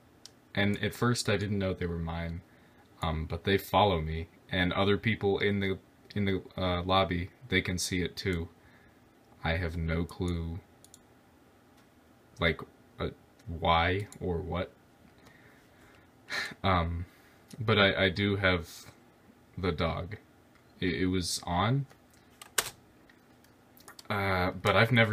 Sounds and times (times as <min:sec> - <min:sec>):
Speech: 0:00.6 - 0:02.4, 0:03.0 - 0:08.5, 0:09.4 - 0:10.7, 0:12.4 - 0:14.8, 0:16.5 - 0:19.0, 0:19.6 - 0:20.2, 0:20.8 - 0:21.9, 0:24.0 - 0:25.1.